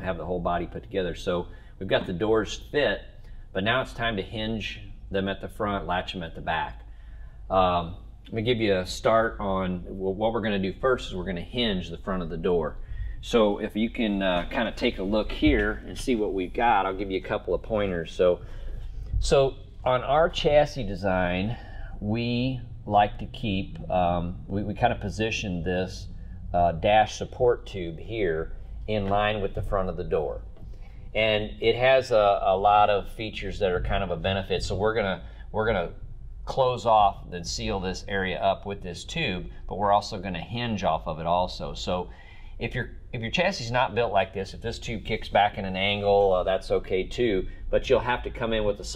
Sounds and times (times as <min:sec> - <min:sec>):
Speech: 0:00.0 - 0:06.8, 0:07.5 - 0:18.4, 0:19.2 - 0:30.5, 0:31.2 - 0:48.9.